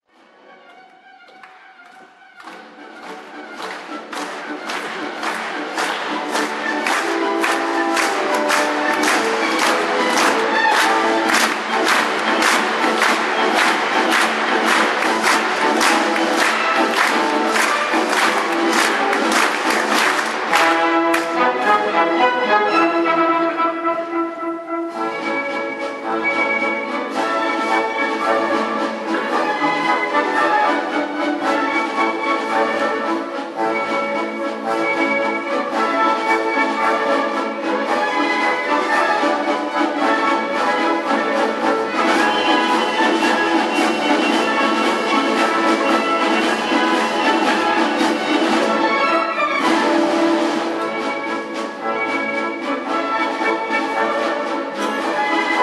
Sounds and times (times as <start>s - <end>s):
Orchestra: 0.0s - 55.6s.